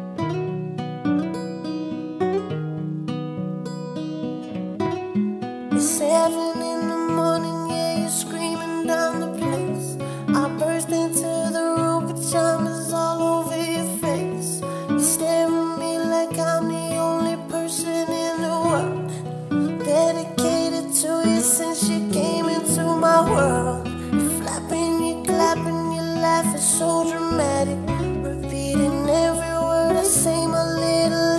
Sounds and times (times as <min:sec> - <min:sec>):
Independent music: 0:00.0 - 0:31.3.